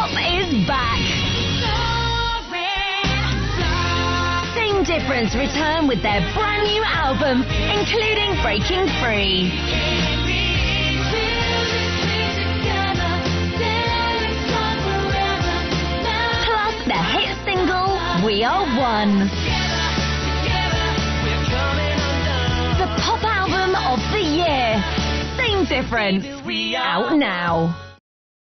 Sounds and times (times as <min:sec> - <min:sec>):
Speech: 0:00.0 - 0:01.0, 0:04.6 - 0:09.5, 0:16.5 - 0:19.4, 0:22.8 - 0:27.8
Music: 0:00.0 - 0:28.0.